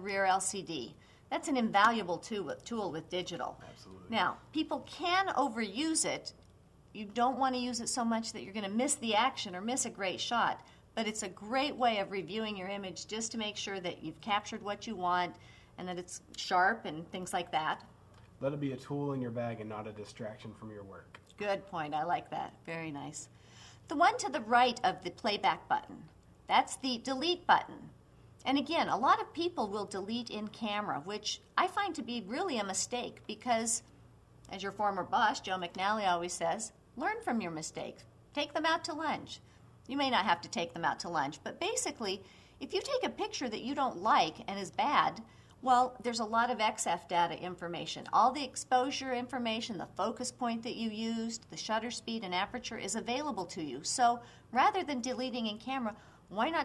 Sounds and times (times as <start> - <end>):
Speech: 0.0 - 6.4, 7.0 - 17.8, 18.4 - 23.3, 23.9 - 33.8, 34.5 - 56.6.